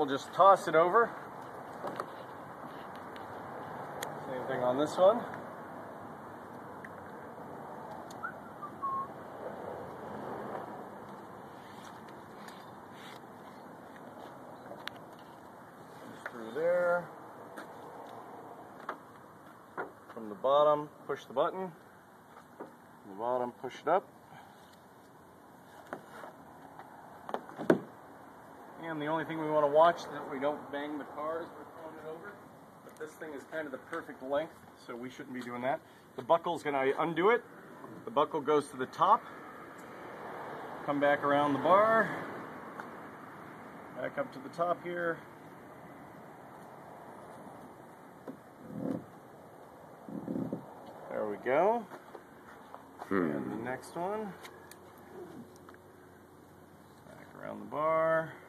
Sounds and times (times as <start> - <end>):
Speech: 0.0 - 1.2, 4.2 - 5.3, 16.2 - 17.1, 20.2 - 21.8, 23.1 - 24.1, 28.8 - 32.4, 33.0 - 37.4, 38.1 - 39.2, 40.9 - 42.2, 44.0 - 45.3, 51.1 - 51.9, 53.1 - 54.4, 57.1 - 58.4.